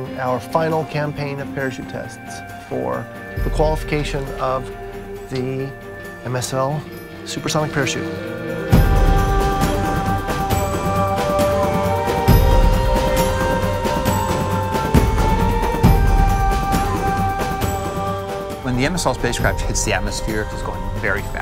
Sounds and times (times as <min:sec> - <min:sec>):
Speech: 0:00.0 - 0:08.1, 0:18.6 - 0:21.4
Music: 0:00.0 - 0:21.4.